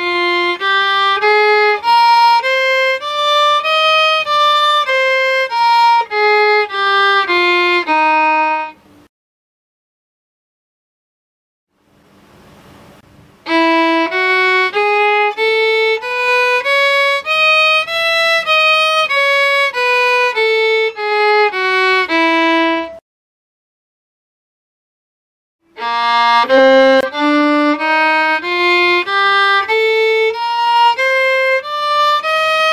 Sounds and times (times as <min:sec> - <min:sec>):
Violin, fiddle: 0:00.0 - 0:08.8, 0:13.4 - 0:23.0, 0:25.7 - 0:32.7.